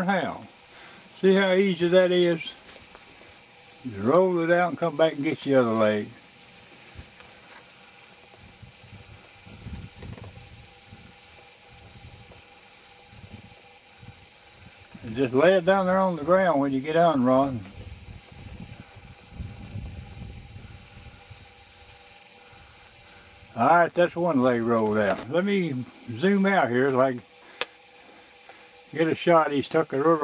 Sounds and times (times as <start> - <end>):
Speech: 0.0 - 0.5, 1.2 - 2.6, 3.9 - 6.2, 15.0 - 17.7, 23.6 - 27.2, 29.0 - 30.2.